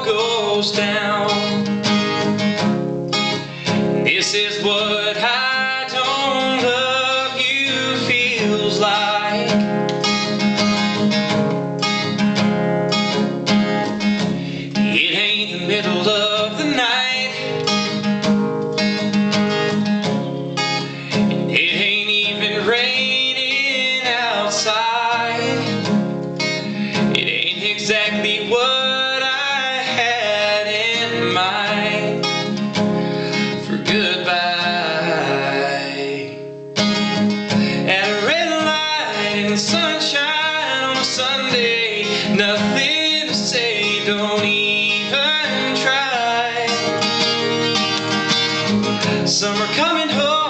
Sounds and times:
Music: 0.0 - 50.4.

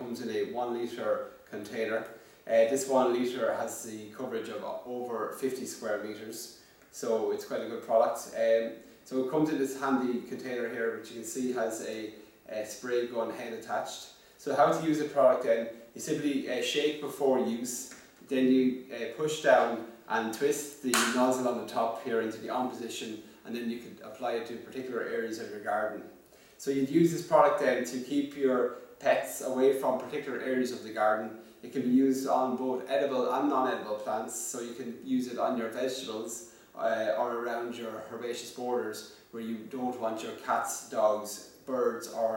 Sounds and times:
Speech: 0.0 - 42.3.

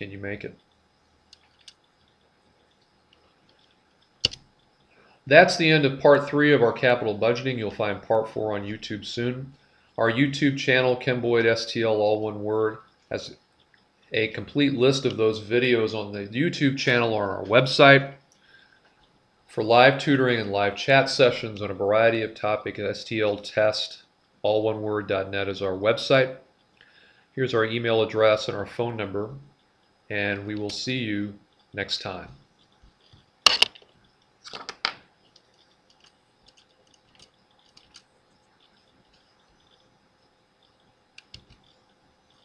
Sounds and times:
Speech: 0.0 - 0.6, 5.3 - 13.4, 14.2 - 18.2, 19.5 - 26.4, 27.4 - 29.5, 30.1 - 32.4.

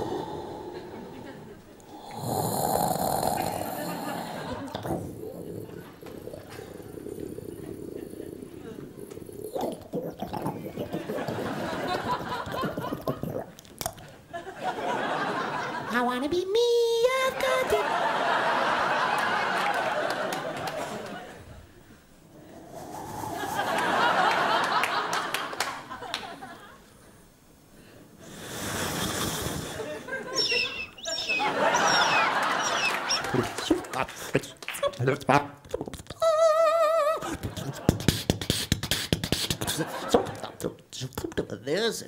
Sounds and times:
Inside, large room or hall: 0.0 - 15.8.

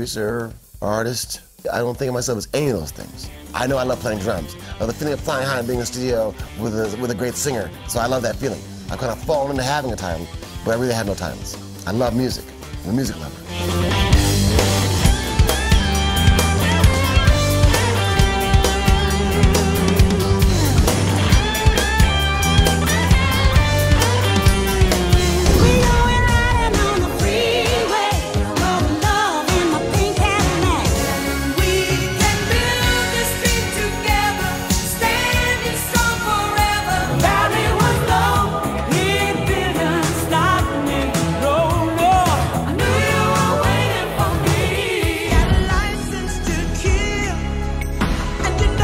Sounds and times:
Music: 0.0 - 48.8.

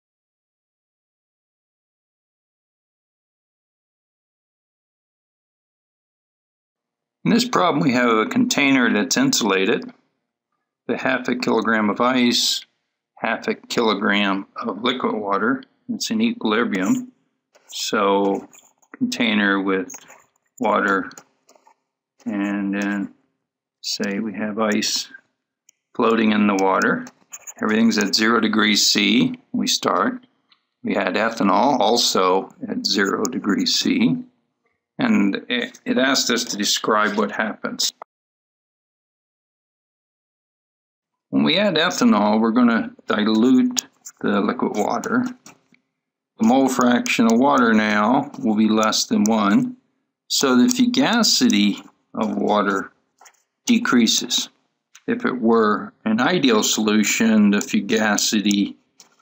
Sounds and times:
Speech: 7.3 - 9.9, 10.9 - 12.6, 13.2 - 17.1, 17.7 - 21.2, 22.2 - 23.1, 23.8 - 25.2, 26.0 - 30.2, 30.9 - 34.2, 35.0 - 38.1, 41.4 - 45.5, 46.4 - 49.7, 50.3 - 52.9, 53.7 - 58.7.

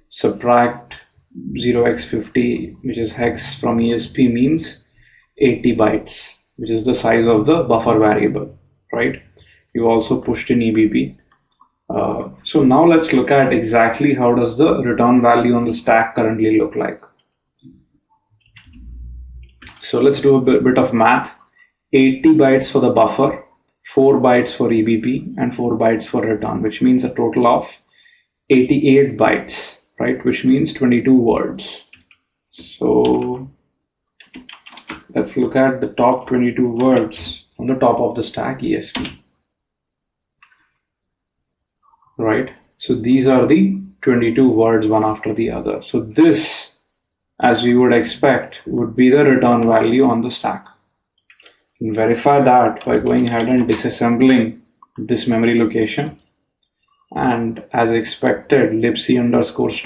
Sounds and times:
Speech: 0.0 - 4.8, 5.4 - 9.2, 9.8 - 11.1, 11.9 - 17.0, 18.6 - 21.3, 22.0 - 27.8, 28.5 - 32.0, 32.6 - 33.5, 34.2 - 39.1, 42.2 - 46.7, 47.4 - 50.7, 51.8 - 56.2, 57.2 - 59.8.

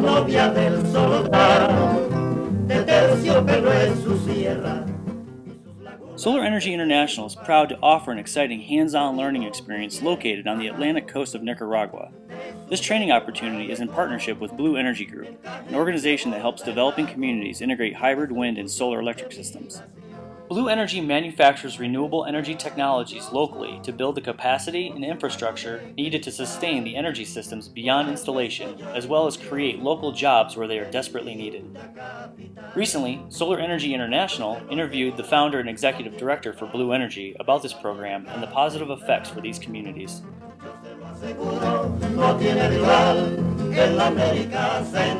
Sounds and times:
Speech: 6.2 - 12.1, 12.7 - 19.8, 20.5 - 31.7, 32.8 - 40.2.

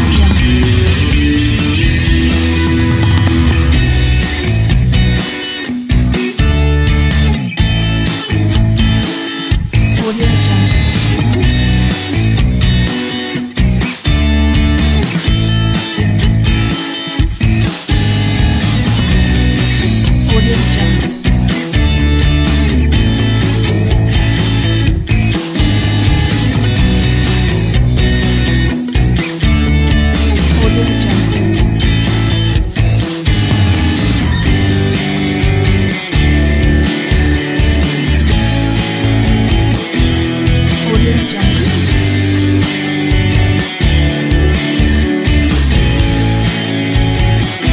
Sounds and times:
Music: 0.0 - 47.7.

